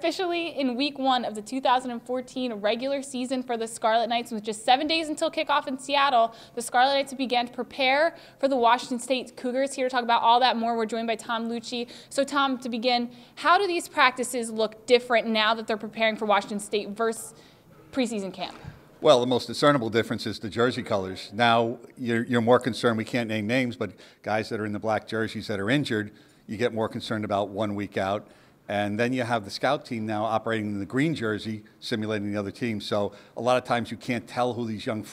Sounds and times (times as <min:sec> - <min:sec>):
Speech: 0:18.0 - 0:35.1.